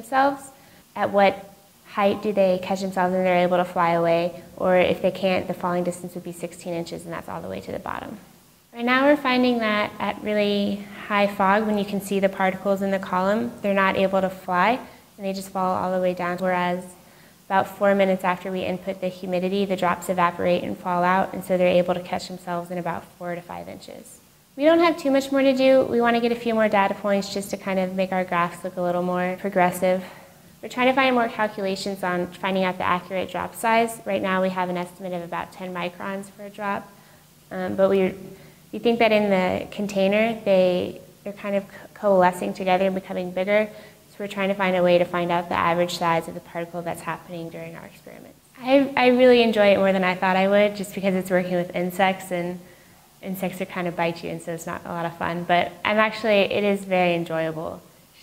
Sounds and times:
Speech: 0.0 - 52.6, 53.2 - 58.2.

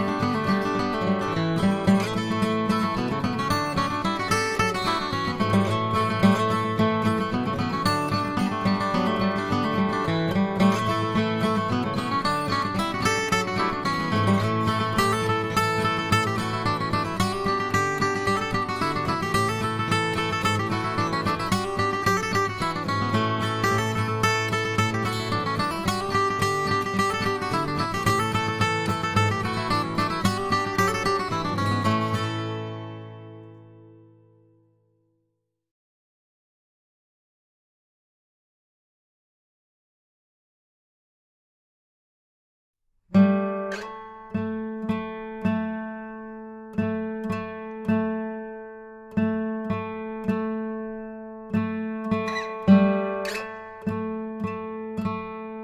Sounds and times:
Acoustic guitar: 0.0 - 34.9, 43.1 - 55.6.

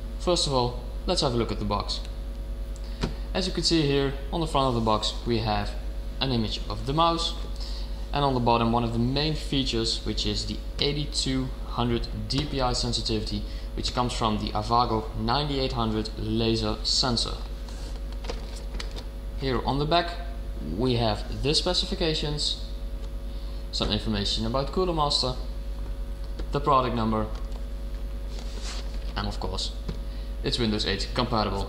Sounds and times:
Speech: 0.2 - 2.1, 3.3 - 7.4, 8.1 - 17.5, 19.4 - 22.7, 23.7 - 25.5, 26.5 - 27.4, 29.2 - 29.8, 30.4 - 31.6.

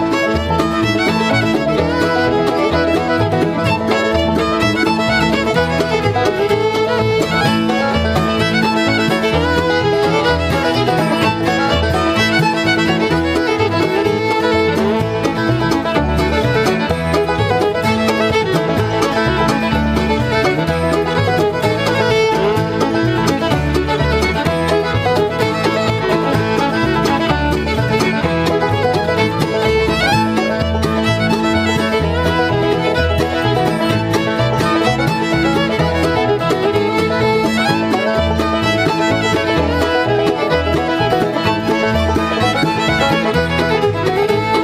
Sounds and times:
Violin, fiddle: 0.0 - 44.6.

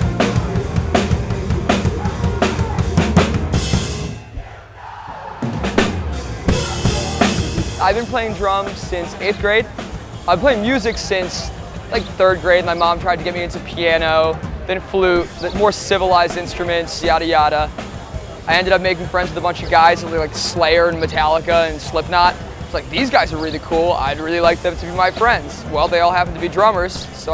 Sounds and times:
Music: 0.0 - 27.3
Speech: 6.5 - 27.3.

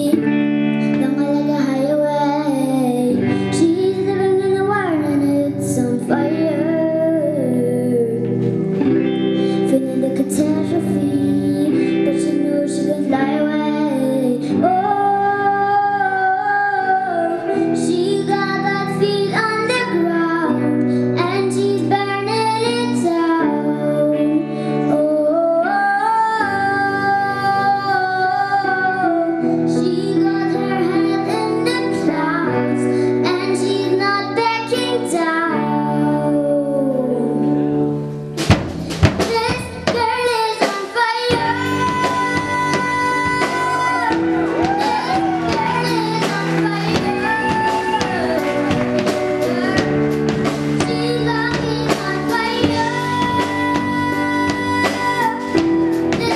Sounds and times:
Child singing: 0.0 - 37.6, 39.0 - 56.3
Music: 0.0 - 56.3
Female singing: 0.9 - 8.5, 9.6 - 37.6, 39.3 - 56.3.

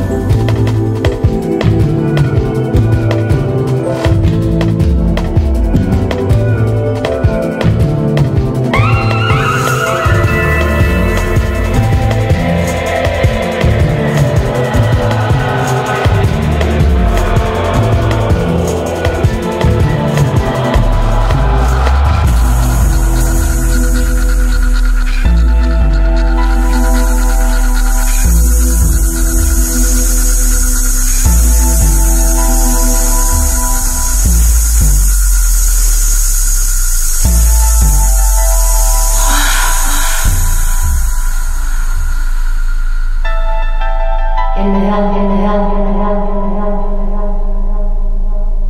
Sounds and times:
Soundtrack music: 0.0 - 48.6.

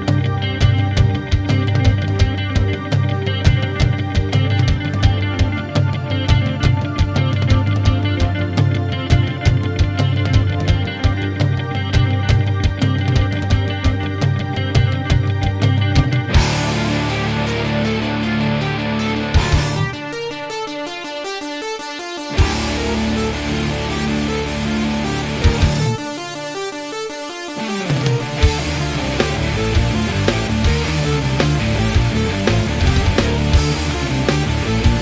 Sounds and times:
Progressive rock: 0.0 - 35.0.

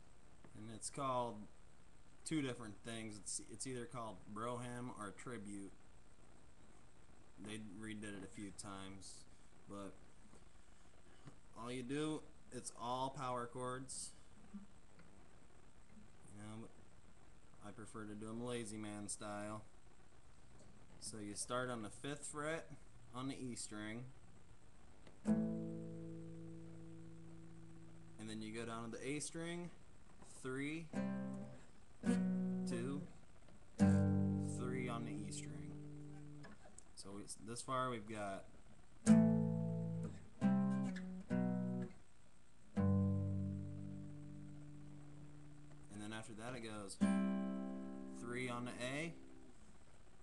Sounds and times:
Speech: 0.5 - 1.6, 2.2 - 5.8, 7.4 - 10.0, 11.6 - 14.2, 16.2 - 16.8, 17.6 - 19.7, 21.0 - 24.2, 28.2 - 30.9, 32.6 - 33.2, 33.8 - 35.8, 37.0 - 38.6, 45.9 - 47.1, 48.1 - 49.2
Strum: 25.2 - 33.2, 33.8 - 36.7, 39.0 - 42.0, 42.7 - 49.6.

